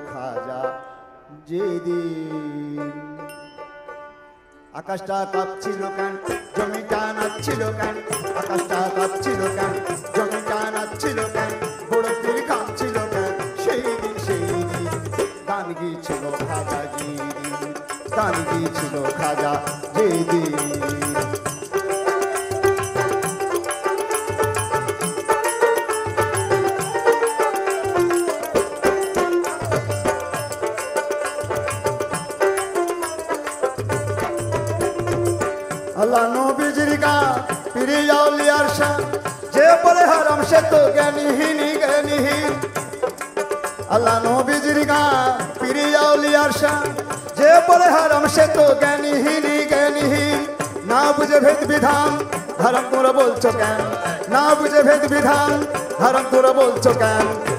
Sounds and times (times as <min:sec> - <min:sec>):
Music: 0:00.0 - 0:57.5
Singing: 0:04.8 - 0:21.4.